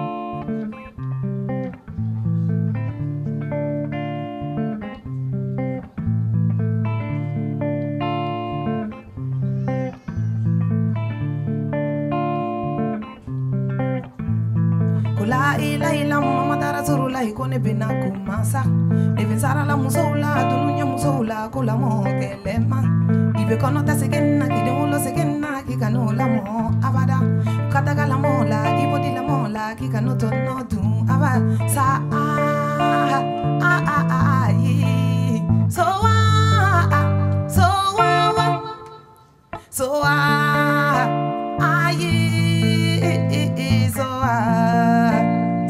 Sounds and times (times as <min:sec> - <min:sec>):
Music: 0:00.0 - 0:45.7.